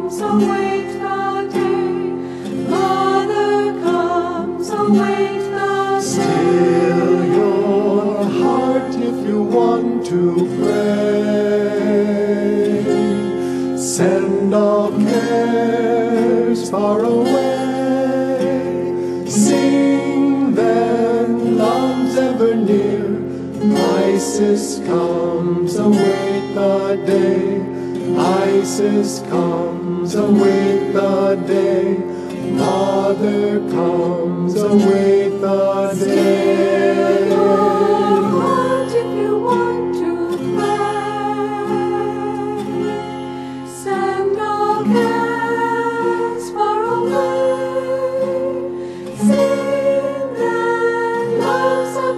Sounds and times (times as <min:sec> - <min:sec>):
Vocal music: 0:00.0 - 0:52.1.